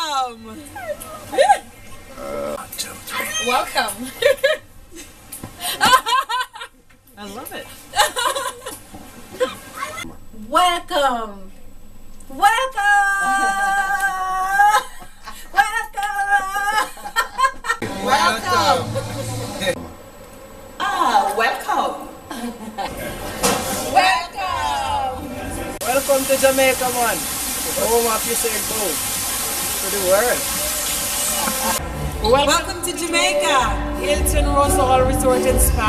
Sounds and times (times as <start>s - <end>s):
Female speech, woman speaking: 0.0s - 0.9s, 3.2s - 4.2s, 7.2s - 7.8s, 10.4s - 11.6s, 12.3s - 14.9s, 17.9s - 19.8s, 20.8s - 22.1s, 23.9s - 25.2s, 25.8s - 27.2s, 32.2s - 35.8s.